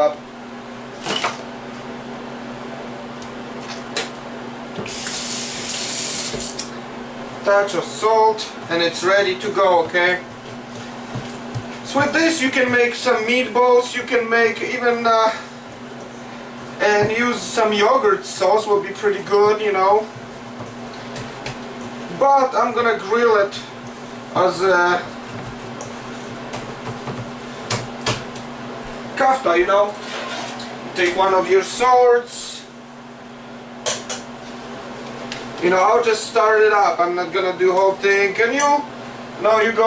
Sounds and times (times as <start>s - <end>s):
Speech: 7.4s - 10.3s, 11.9s - 15.5s, 16.8s - 20.1s, 22.1s - 23.8s, 24.4s - 25.2s, 29.2s - 30.0s, 31.0s - 32.8s, 35.6s - 39.8s.